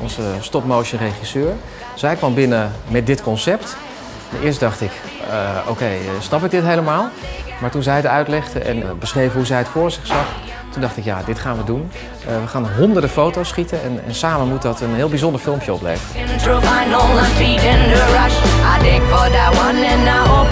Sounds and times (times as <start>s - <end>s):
Speech: 0.0s - 16.1s
Music: 0.0s - 20.5s.